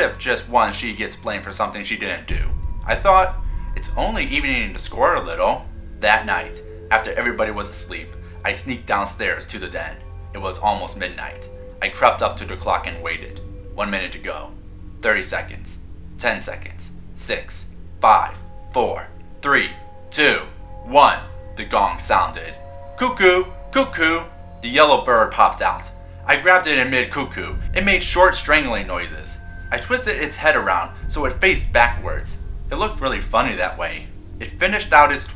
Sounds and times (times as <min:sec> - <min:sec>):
Music: 0:00.0 - 0:35.3
Speech: 0:00.0 - 0:35.3.